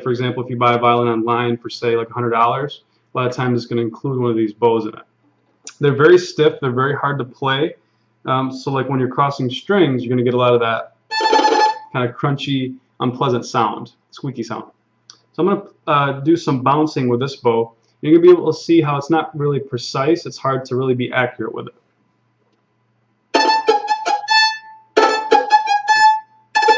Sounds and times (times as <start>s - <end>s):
Speech: 0.0s - 5.0s, 5.7s - 10.9s, 11.9s - 14.7s, 15.3s - 21.7s
Violin, fiddle: 11.1s - 12.0s, 23.4s - 26.7s.